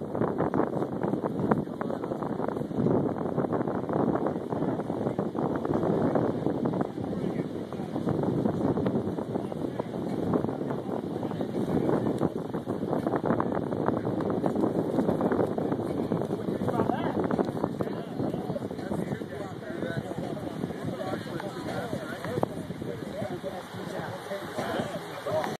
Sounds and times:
Speech: 1.4 - 2.8, 4.1 - 25.5.

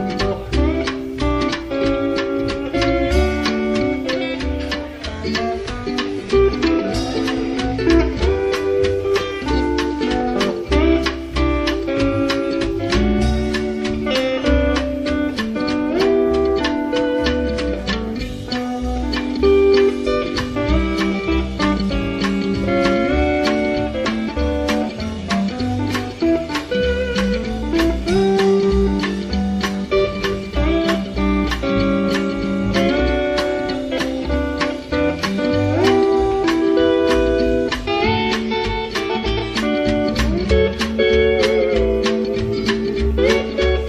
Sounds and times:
Flamenco: 0.0 - 43.8.

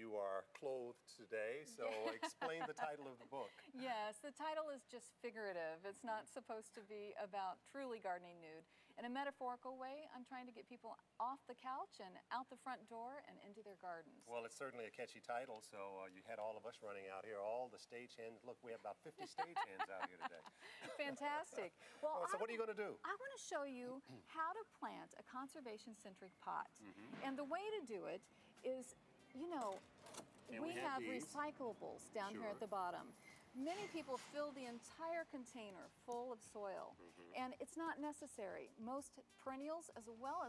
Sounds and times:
Speech: 0.0 - 4.6, 21.0 - 28.0, 30.5 - 33.0.

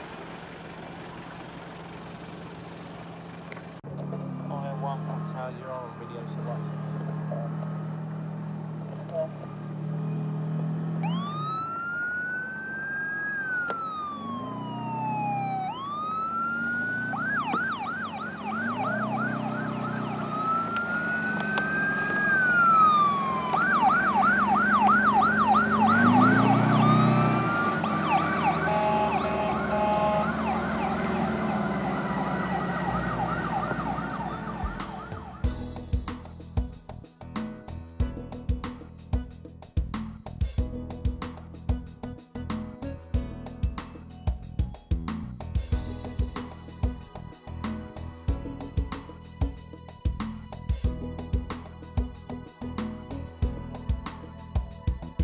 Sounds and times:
Ambulance (siren): 11.0 - 35.7.

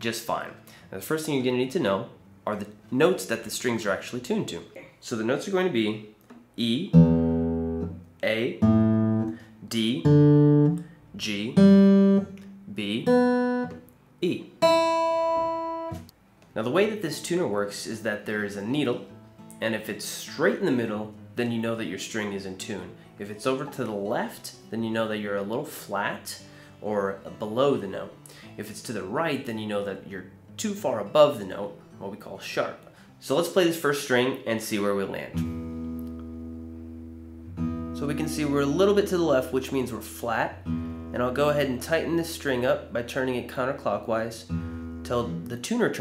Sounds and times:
Music: 0.0 - 4.6, 5.9 - 46.0
Speech: 0.0 - 7.0, 8.2 - 8.7, 9.6 - 10.2, 11.2 - 11.7, 12.7 - 13.2, 14.2 - 14.6, 16.6 - 35.4, 38.0 - 46.0.

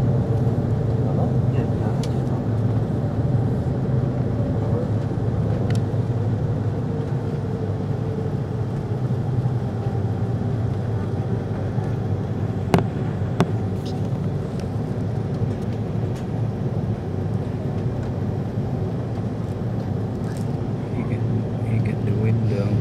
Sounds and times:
Aircraft: 0.0 - 22.8.

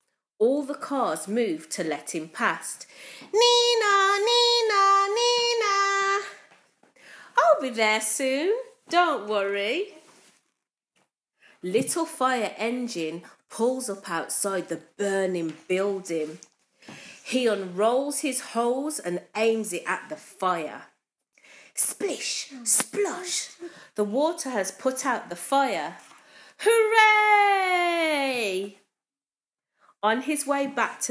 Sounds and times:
Speech: 0.4 - 2.8, 7.4 - 10.0, 11.6 - 16.4, 17.3 - 21.0, 21.8 - 26.0, 26.6 - 28.8, 30.0 - 31.1.

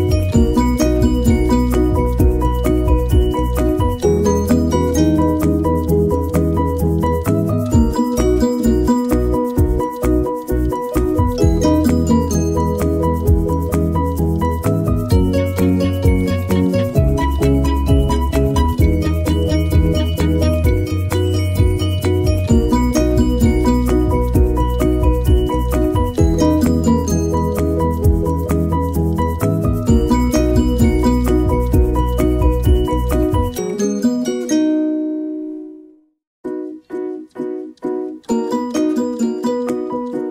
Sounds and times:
Music: 0.0 - 40.3.

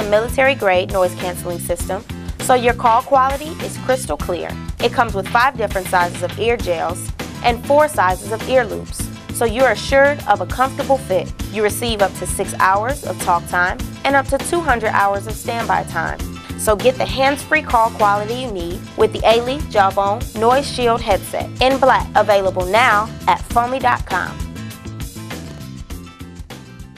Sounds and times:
Speech: 0.0 - 24.4
Music: 0.0 - 26.9.

